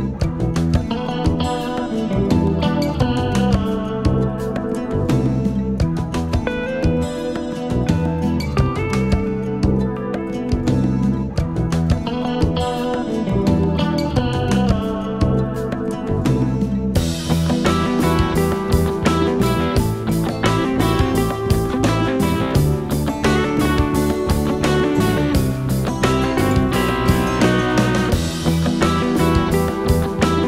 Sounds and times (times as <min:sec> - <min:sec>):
Music: 0:00.0 - 0:30.4.